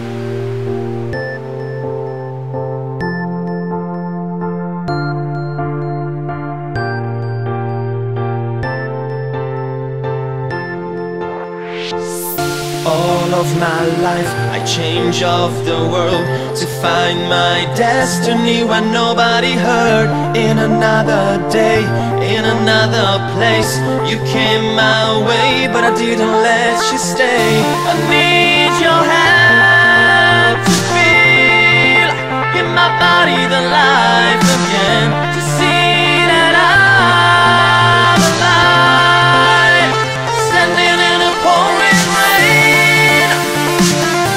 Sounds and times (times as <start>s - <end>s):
Music: 0.0s - 44.3s.